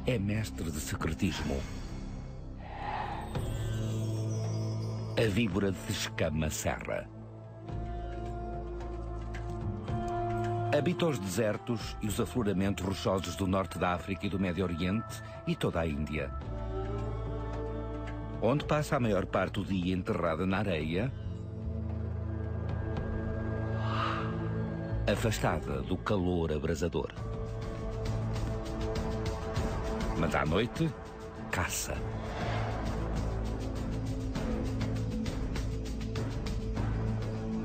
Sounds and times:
Speech: 0.0 - 1.7, 5.2 - 7.1, 10.7 - 16.3, 18.4 - 21.1, 25.1 - 27.2, 30.2 - 32.0
Music: 0.0 - 37.6.

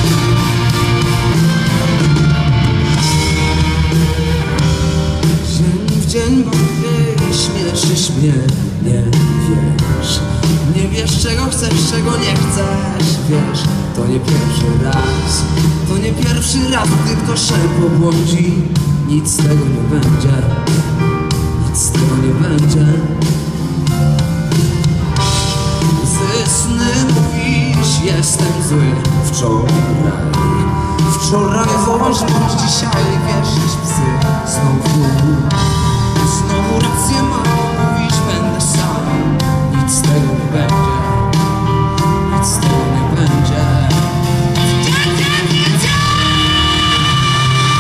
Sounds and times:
Blues: 0.0 - 47.8
Independent music: 0.0 - 47.8
Rhythm and blues: 0.0 - 47.8
Ska: 0.0 - 47.8.

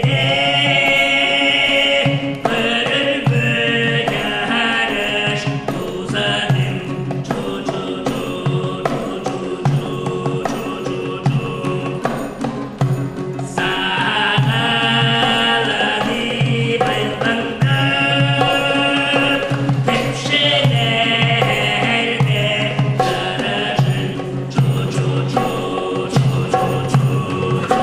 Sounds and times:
Male singing: 0.0 - 12.6, 13.4 - 27.8
Music: 0.0 - 27.8.

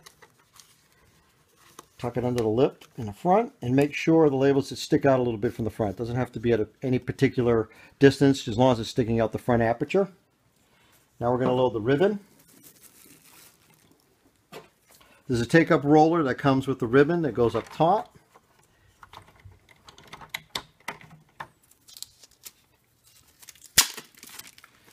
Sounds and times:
Speech: 2.0 - 10.2, 11.2 - 12.3, 15.3 - 18.2.

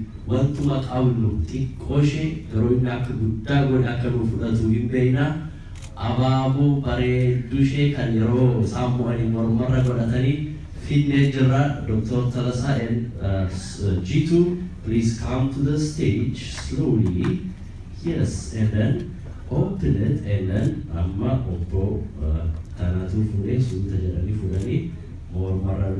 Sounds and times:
Narration, monologue: 0.0 - 25.9
Male speech, man speaking: 0.3 - 25.9.

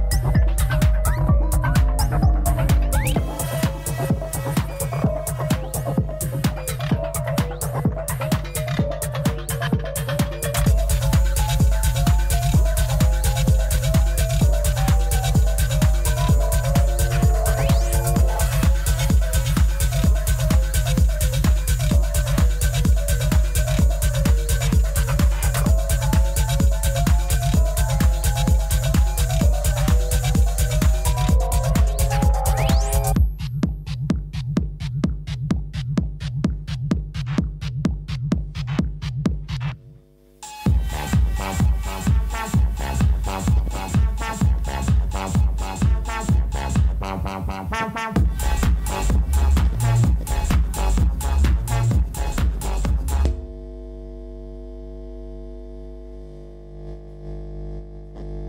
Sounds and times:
Music: 0.0 - 53.4.

